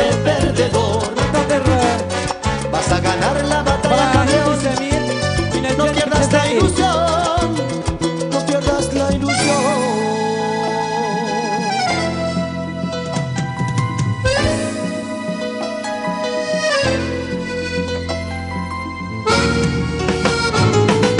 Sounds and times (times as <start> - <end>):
Salsa music: 0.0 - 21.1.